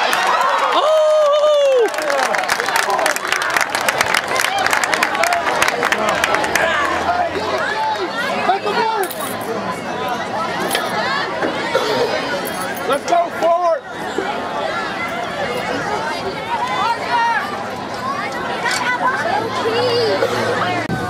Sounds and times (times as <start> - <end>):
Outside, urban or manmade: 0.0 - 21.1.